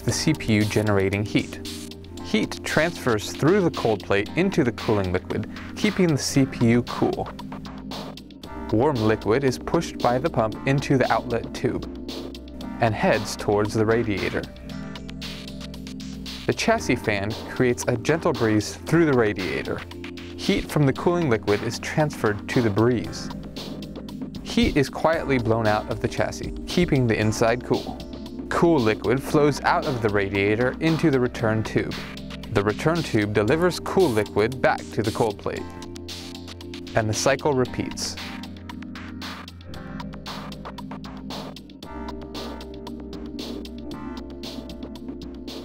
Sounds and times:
Speech: 0.0s - 7.3s, 8.7s - 11.9s, 12.8s - 14.5s, 16.5s - 19.8s, 20.4s - 23.4s, 24.5s - 35.7s, 37.0s - 38.3s
Music: 0.0s - 45.6s.

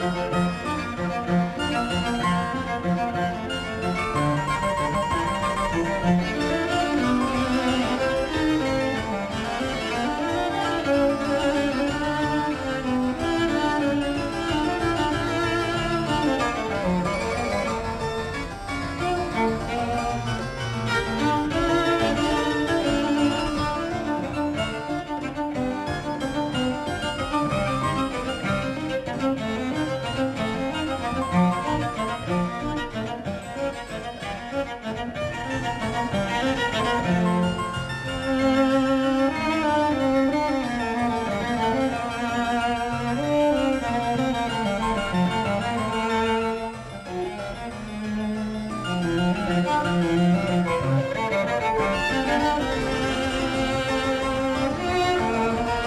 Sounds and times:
Violin, fiddle: 0.0s - 55.8s.

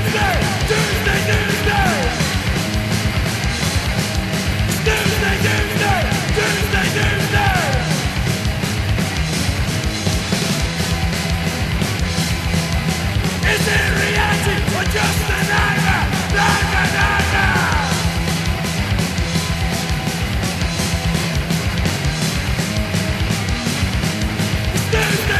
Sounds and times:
Heavy metal: 0.0s - 25.3s
Progressive rock: 0.0s - 25.3s
Punk rock: 0.0s - 25.3s.

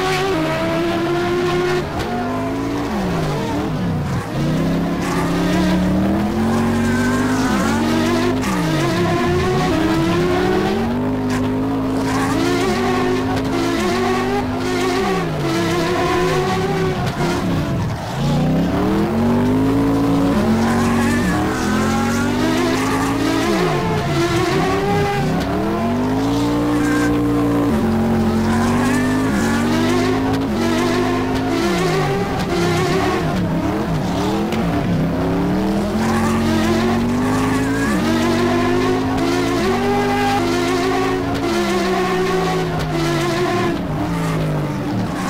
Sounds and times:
Race car, auto racing: 0.0s - 45.2s.

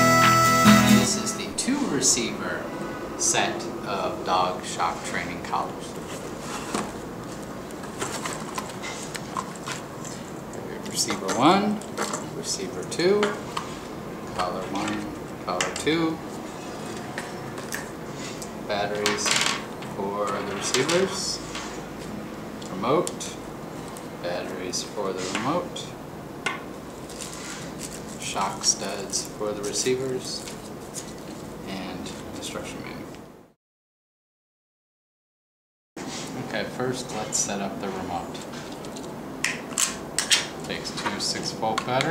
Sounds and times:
Speech: 1.0s - 6.0s, 10.6s - 11.8s, 12.4s - 13.4s, 14.3s - 16.2s, 18.7s - 19.4s, 20.0s - 21.5s, 22.7s - 23.4s, 24.2s - 26.0s, 28.2s - 30.5s, 31.6s - 33.2s, 36.4s - 38.5s, 40.6s - 42.1s.

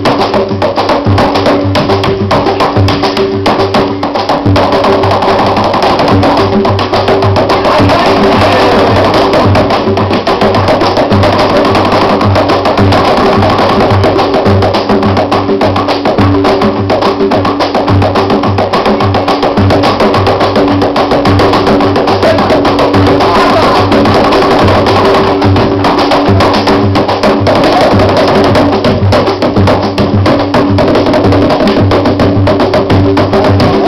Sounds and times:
Flamenco: 0.0s - 33.8s
Dance music: 7.4s - 10.5s, 22.0s - 28.6s.

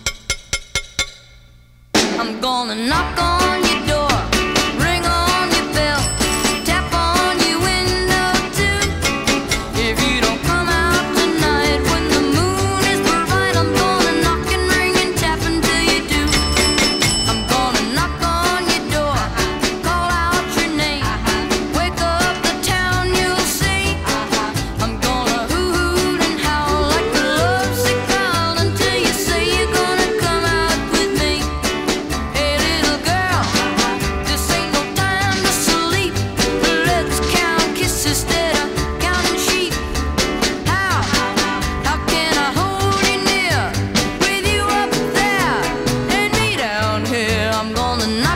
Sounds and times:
Pop music: 2.0s - 48.3s.

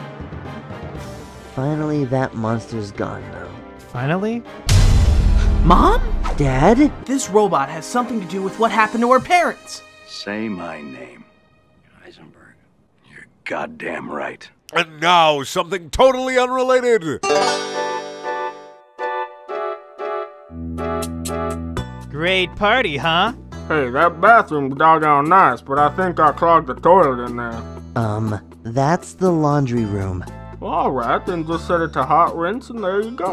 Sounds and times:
Music: 0.0s - 12.1s, 17.2s - 33.3s
Speech: 1.6s - 4.5s, 5.6s - 11.2s, 12.0s - 17.2s, 22.1s - 33.3s.

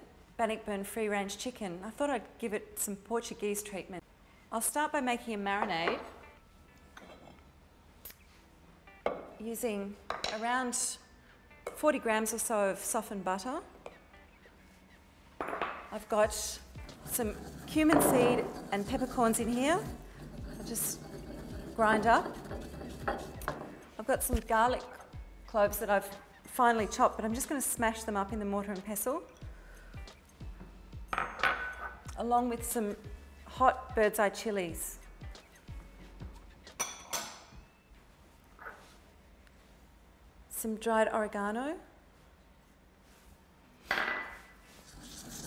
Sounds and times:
Music: 1.3s - 39.9s, 43.1s - 45.4s
Speech: 16.0s - 19.9s, 24.0s - 24.9s, 25.5s - 29.3s, 32.2s - 35.0s.

